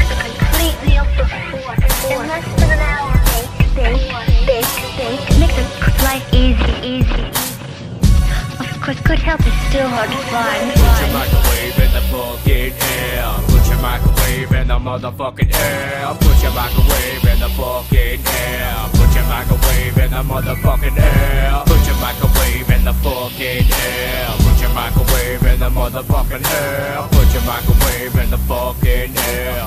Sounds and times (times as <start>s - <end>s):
Rapping: 0.0s - 7.4s, 8.3s - 29.6s
Speech: 0.0s - 7.4s, 8.4s - 11.3s
Music: 0.0s - 29.6s.